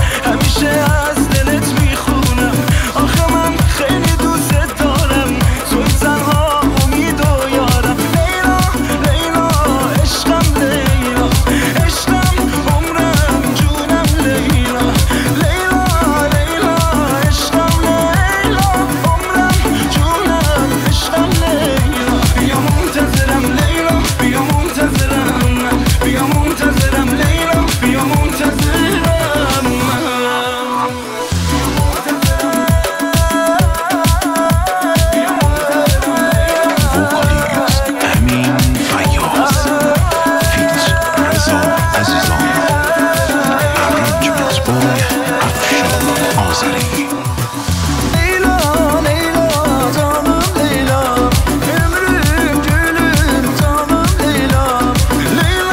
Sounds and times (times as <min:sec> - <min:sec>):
Afrobeat: 0:00.0 - 0:30.2, 0:30.8 - 0:55.7.